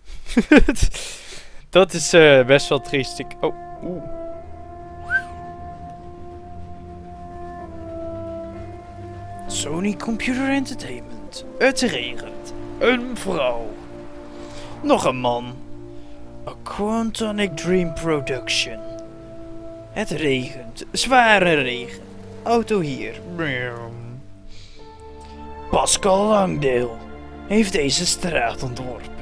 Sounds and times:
Speech: 1.7 - 4.1, 9.5 - 13.8, 14.8 - 15.6, 16.5 - 18.8, 20.0 - 24.2, 25.7 - 29.2
Music: 1.8 - 29.2.

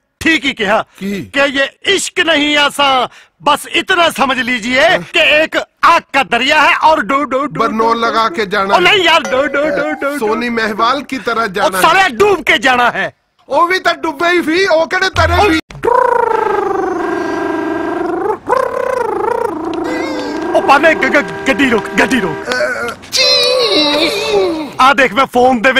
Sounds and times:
Speech: 19.9 - 22.9, 24.0 - 25.7.

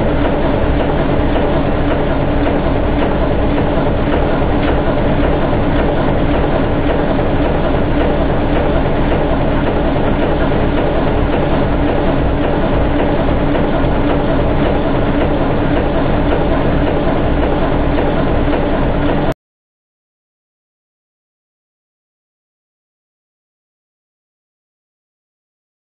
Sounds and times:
Heavy engine (low frequency): 0.0 - 19.4.

